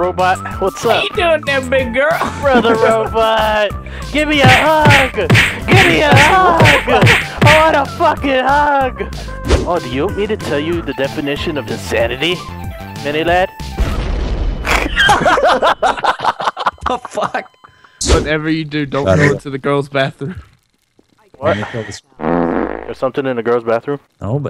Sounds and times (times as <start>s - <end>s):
Music: 0.0s - 19.4s
Speech: 0.1s - 9.1s, 9.7s - 12.4s, 13.0s - 13.5s, 18.0s - 20.4s, 21.3s - 22.0s, 22.9s - 24.4s.